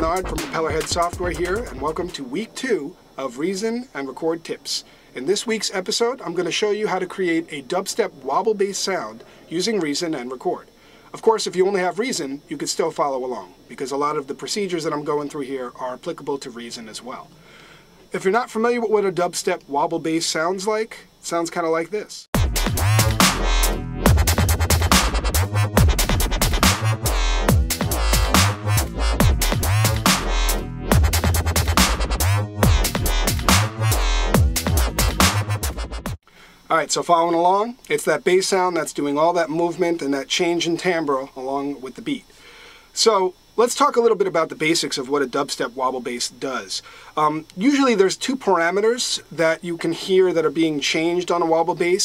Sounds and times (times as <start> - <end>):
Music: 0.0 - 2.2, 22.4 - 36.2
Speech: 0.0 - 17.3, 18.1 - 22.3, 36.7 - 42.3, 43.0 - 52.0.